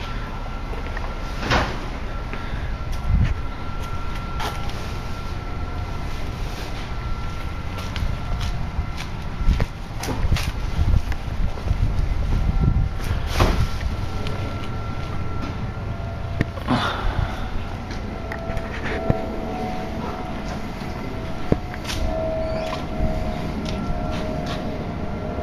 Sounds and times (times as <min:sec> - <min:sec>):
Heavy engine (low frequency): 0:00.0 - 0:25.4.